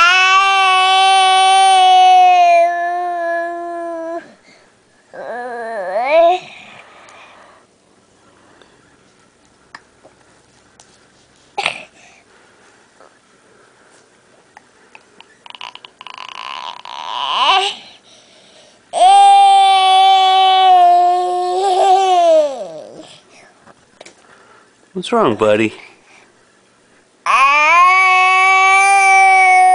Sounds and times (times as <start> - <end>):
Baby cry, infant cry: 0.0 - 4.3, 15.5 - 17.8, 27.3 - 29.7.